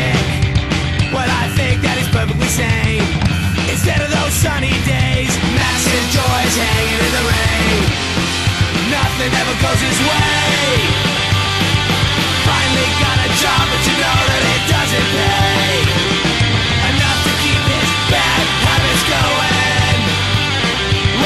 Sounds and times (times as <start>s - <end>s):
Music: 0.0s - 21.2s.